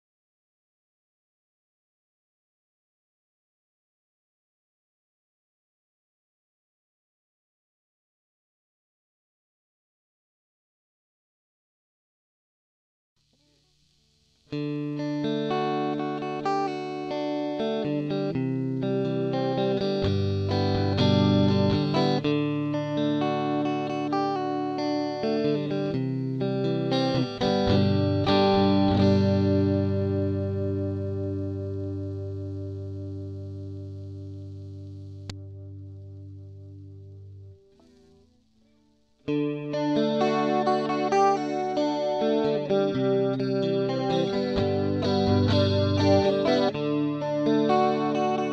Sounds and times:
Electric guitar: 0:13.3 - 0:48.5.

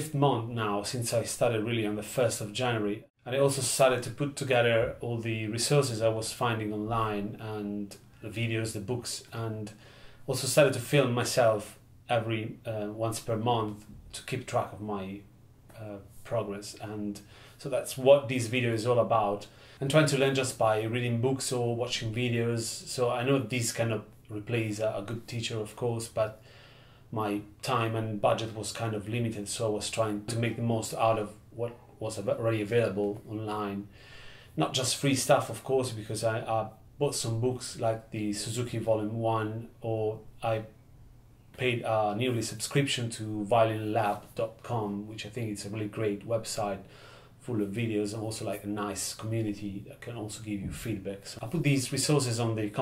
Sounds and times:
Speech: 0:00.0 - 0:26.4, 0:27.1 - 0:33.9, 0:34.6 - 0:40.8, 0:41.5 - 0:52.8.

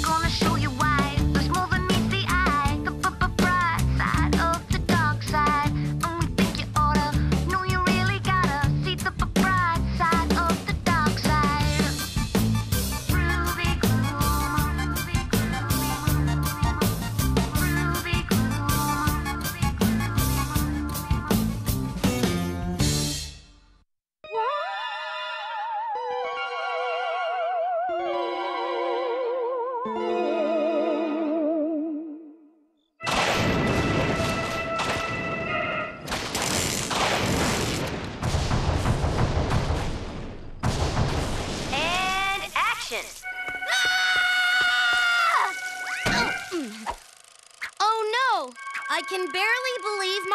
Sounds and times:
Music: 0:00.0 - 0:24.8, 0:25.9 - 0:36.0, 0:43.2 - 0:43.8, 0:48.5 - 0:50.3.

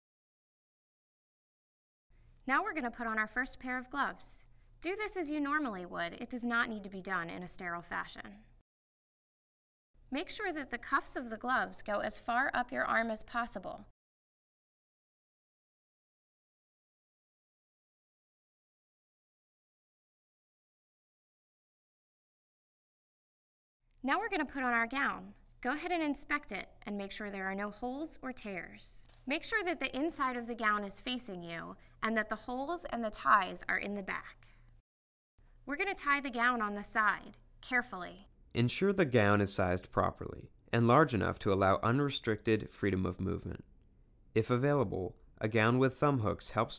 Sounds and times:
Speech: 0:02.5 - 0:08.5, 0:10.1 - 0:13.9, 0:24.0 - 0:34.4, 0:35.7 - 0:43.6, 0:44.4 - 0:46.7.

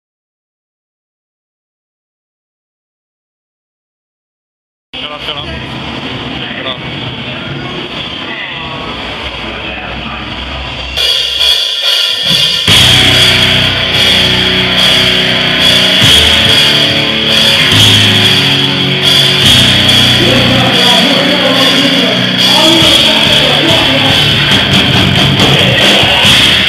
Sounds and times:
Speech: 0:05.0 - 0:10.4, 0:20.2 - 0:24.3
Punk rock: 0:10.9 - 0:26.6.

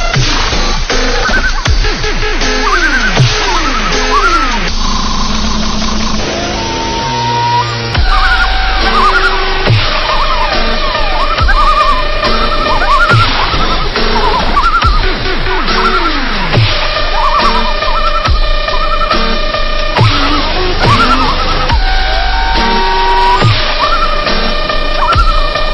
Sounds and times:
Music: 0:00.0 - 0:25.7.

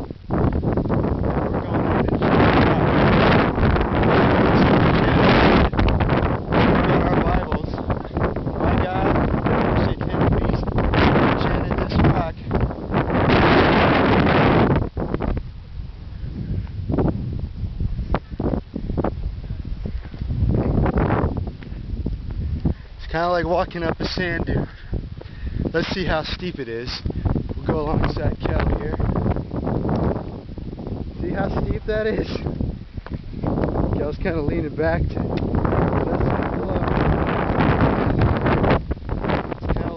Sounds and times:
Speech: 0:06.9 - 0:07.8, 0:11.4 - 0:12.5, 0:23.0 - 0:24.7, 0:25.8 - 0:29.0, 0:31.2 - 0:32.5, 0:34.0 - 0:35.3, 0:39.6 - 0:39.9
Walk, footsteps: 0:19.9 - 0:20.3, 0:21.6 - 0:23.0.

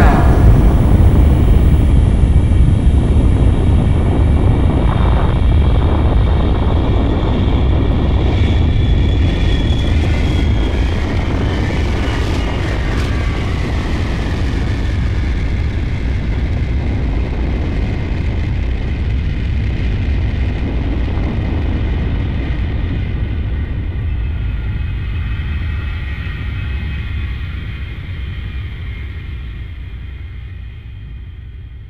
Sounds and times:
Aircraft engine: 0:00.0 - 0:31.9.

